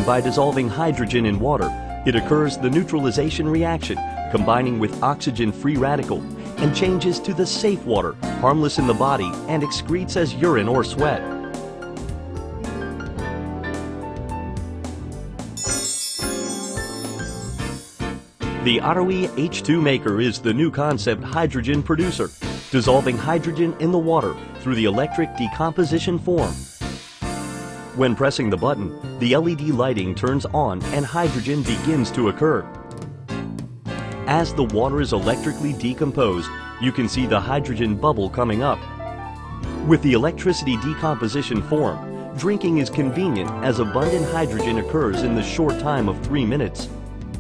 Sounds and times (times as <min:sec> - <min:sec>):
Speech: 0:00.0 - 0:11.2, 0:18.6 - 0:26.6, 0:28.0 - 0:32.7, 0:34.3 - 0:38.8, 0:39.8 - 0:46.9
Music: 0:00.0 - 0:47.4.